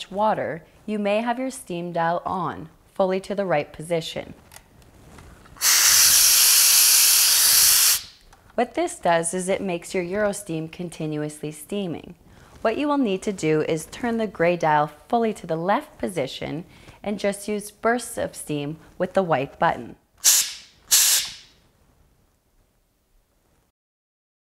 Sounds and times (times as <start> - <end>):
Hiss: 5.6 - 8.2, 20.2 - 21.6.